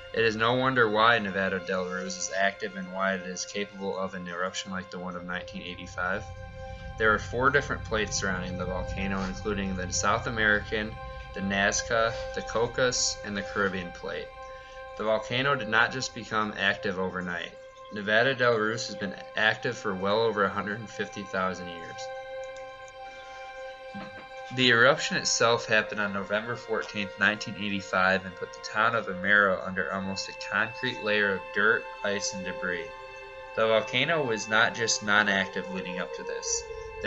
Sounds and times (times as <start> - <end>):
Music: 0.0 - 37.0
Speech: 0.2 - 6.2, 7.0 - 14.3, 15.0 - 22.1, 24.0 - 32.9, 33.6 - 37.0.